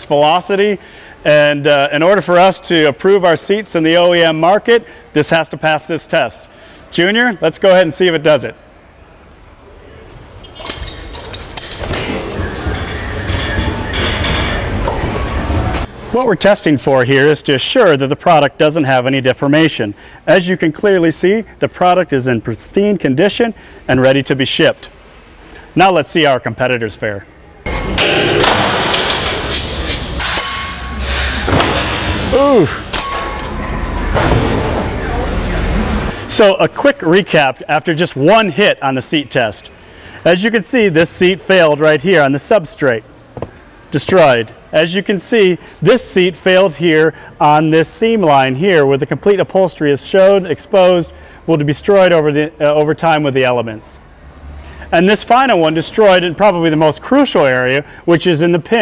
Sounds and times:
Speech: 0.0 - 8.6, 16.1 - 24.9, 25.8 - 27.3, 36.3 - 43.0, 43.9 - 54.0, 54.9 - 58.8.

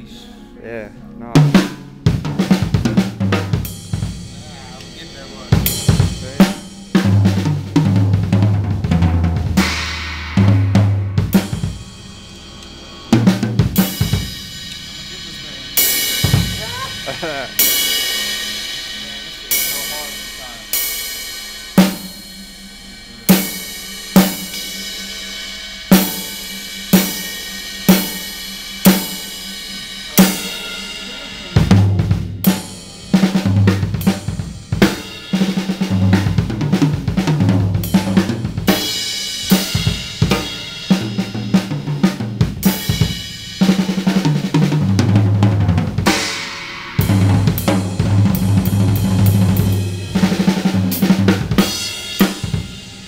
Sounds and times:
Drum kit: 0.0 - 53.0
Bass drum: 1.4 - 20.7, 30.0 - 46.3, 47.0 - 53.0.

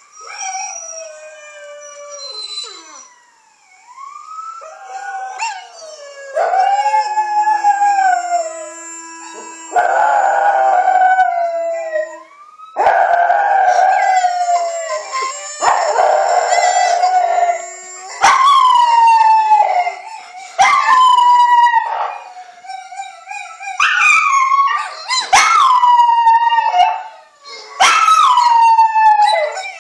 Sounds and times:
Howl: 0.0 - 3.4, 4.6 - 29.8.

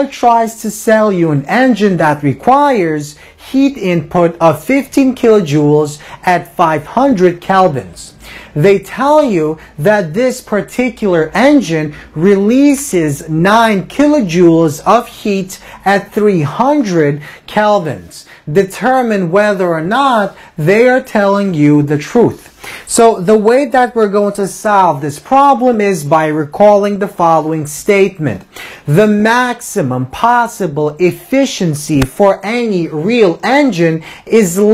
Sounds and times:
Speech: 0.0 - 34.7.

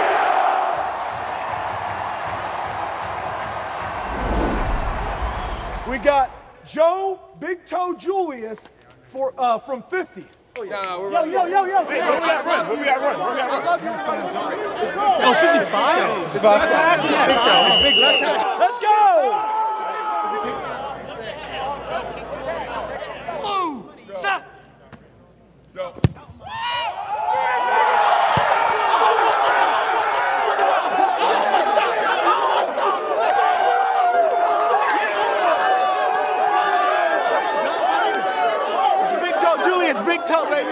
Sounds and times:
Speech: 5.9 - 19.4, 20.1 - 26.3, 39.0 - 40.7.

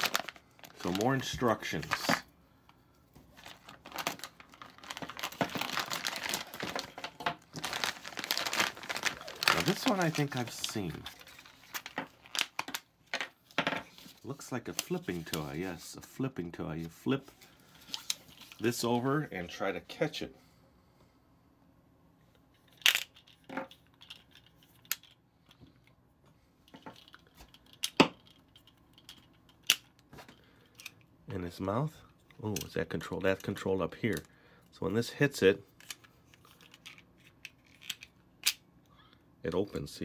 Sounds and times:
Crumpling, crinkling: 0.0 - 2.2, 3.3 - 13.2, 17.7 - 18.9, 36.2 - 38.1
Inside, small room: 0.0 - 40.0
Speech: 0.8 - 2.3, 9.5 - 11.2, 14.2 - 17.3, 18.6 - 20.4, 31.3 - 35.7, 39.4 - 40.0.

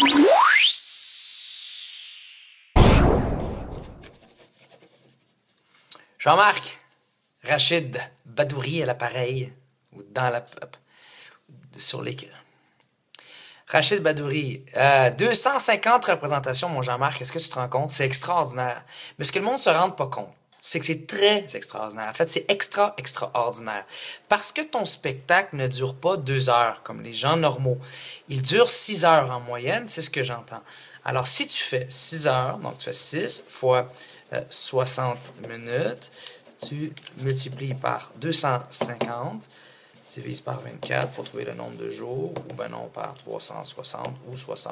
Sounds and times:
Speech: 6.2 - 10.8, 11.5 - 12.5, 13.7 - 39.5, 40.1 - 44.7.

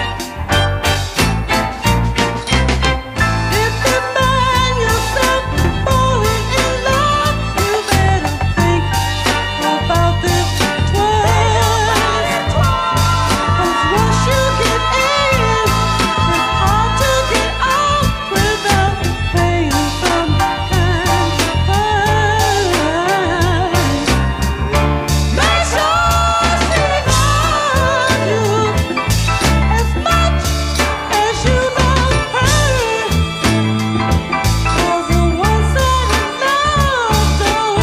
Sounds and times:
Ska: 0.0 - 37.8
Singing: 3.5 - 24.1, 25.3 - 29.0.

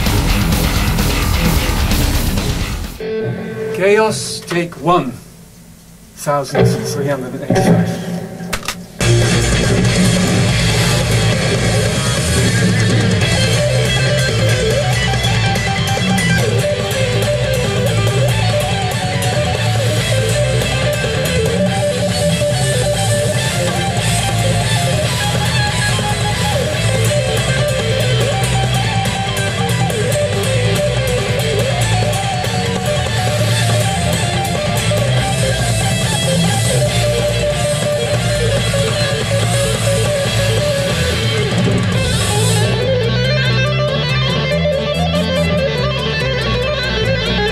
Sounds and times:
Music: 0.0 - 47.5.

